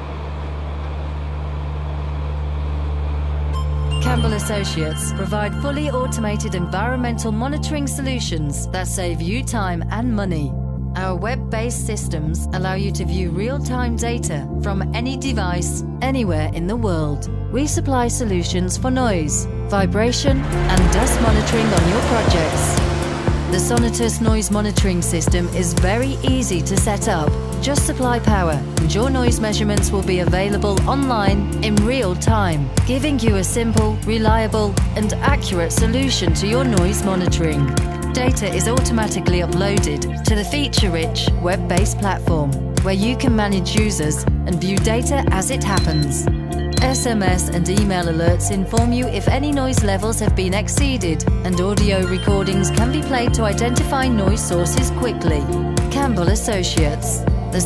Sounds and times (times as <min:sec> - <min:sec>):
Music: 0:02.2 - 0:57.6
Speech: 0:04.0 - 0:22.8, 0:23.5 - 0:57.6.